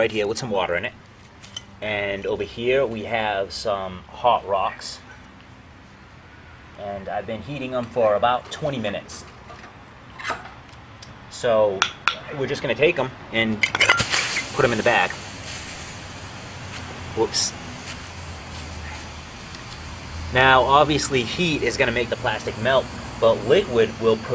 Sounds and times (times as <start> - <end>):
Speech: 0.0 - 1.0, 1.8 - 5.0, 6.8 - 9.3, 11.3 - 13.6, 14.6 - 15.2, 17.2 - 17.6, 20.4 - 24.3
Boiling: 13.7 - 24.3.